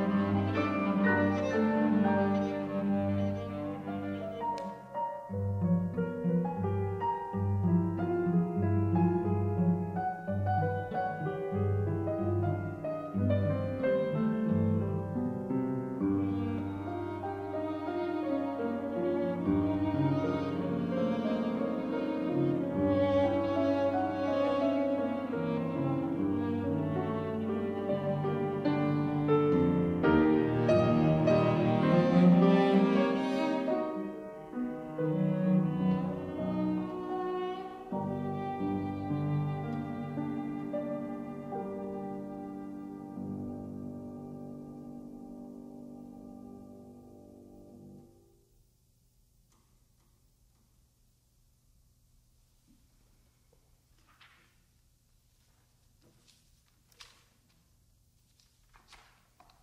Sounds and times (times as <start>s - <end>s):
Cello: 0.0s - 48.2s
Piano: 0.0s - 48.5s
Classical music: 0.0s - 48.6s.